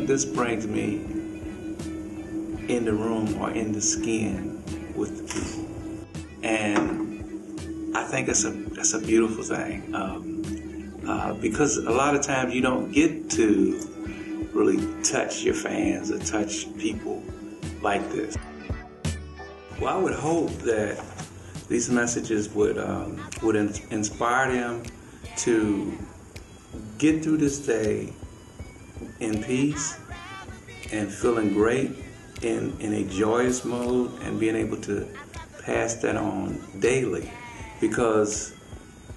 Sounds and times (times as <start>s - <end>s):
Speech: 0.0s - 1.0s, 2.7s - 5.6s, 6.4s - 7.1s, 8.0s - 10.2s, 11.0s - 13.9s, 14.6s - 17.2s, 17.8s - 18.4s, 19.8s - 21.1s, 21.7s - 26.1s, 26.8s - 28.1s, 29.2s - 30.0s, 30.9s - 38.5s
Music: 0.0s - 39.1s.